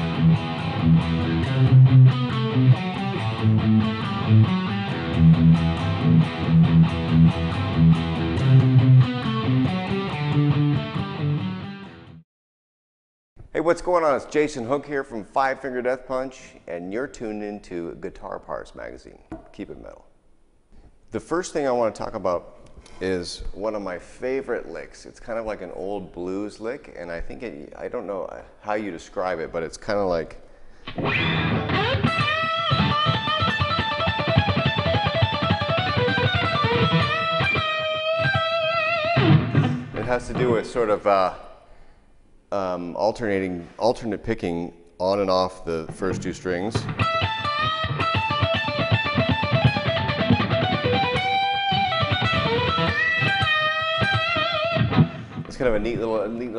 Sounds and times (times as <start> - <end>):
Electric guitar: 0.0 - 12.2, 30.8 - 40.8, 46.2 - 55.8
Speech: 13.5 - 20.1, 21.1 - 30.4, 40.0 - 41.5, 42.5 - 46.9, 55.5 - 56.5.